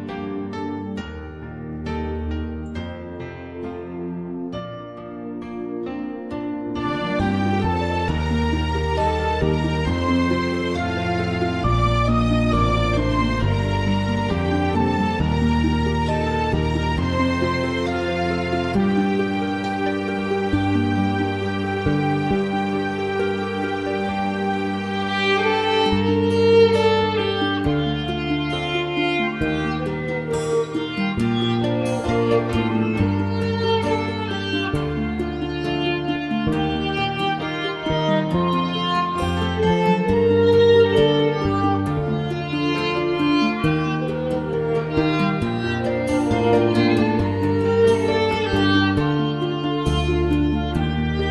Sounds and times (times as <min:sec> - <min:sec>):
Violin, fiddle: 0:00.0 - 0:51.3.